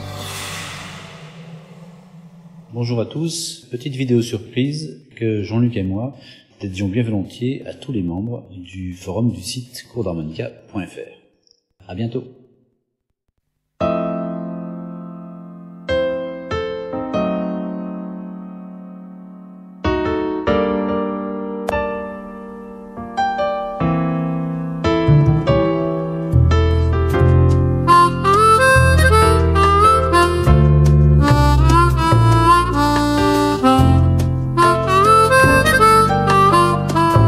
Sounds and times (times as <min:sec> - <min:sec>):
Speech: 0:02.7 - 0:11.2, 0:11.8 - 0:12.4
Electric piano: 0:13.8 - 0:37.2.